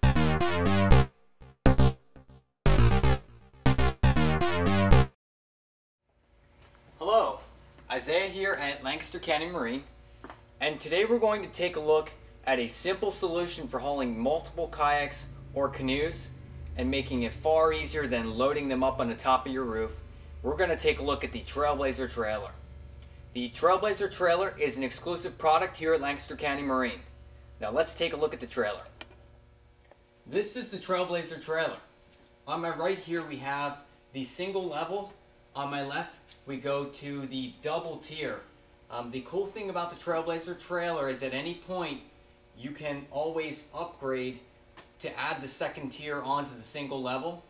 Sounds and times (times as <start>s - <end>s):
Speech: 7.0s - 9.9s, 10.6s - 22.6s, 23.4s - 29.0s, 30.3s - 31.9s, 32.5s - 44.4s, 45.0s - 47.4s.